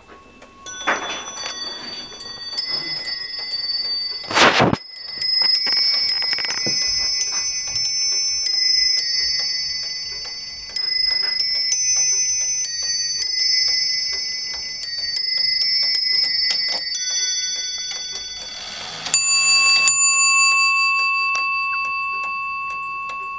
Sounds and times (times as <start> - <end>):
Tick-tock: 0.0 - 23.3.